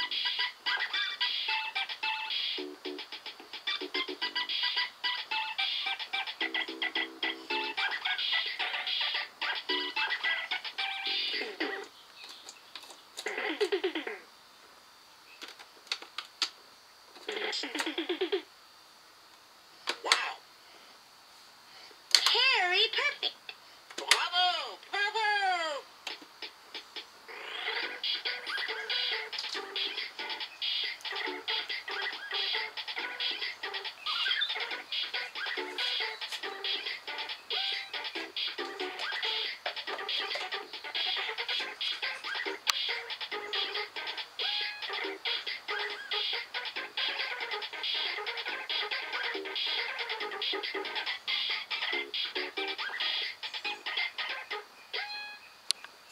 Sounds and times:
Video game music: 1.3s - 11.9s, 27.6s - 51.1s
Speech: 22.2s - 23.4s, 24.0s - 25.9s.

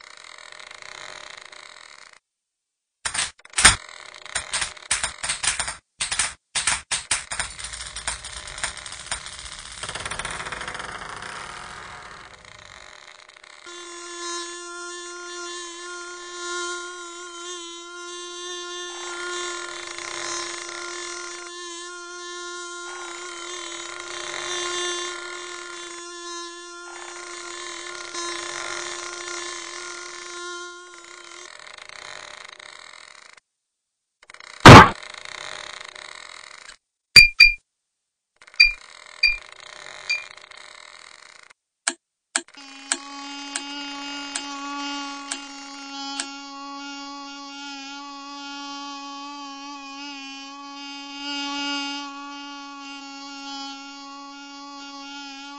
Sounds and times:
Fly, housefly: 0.0s - 2.2s, 3.2s - 5.6s, 7.1s - 33.4s, 34.2s - 36.8s, 38.4s - 41.6s, 42.4s - 55.5s
Mosquito: 0.0s - 2.2s, 3.8s - 5.4s, 7.5s - 33.4s, 34.2s - 36.8s, 38.4s - 41.6s, 42.4s - 55.5s.

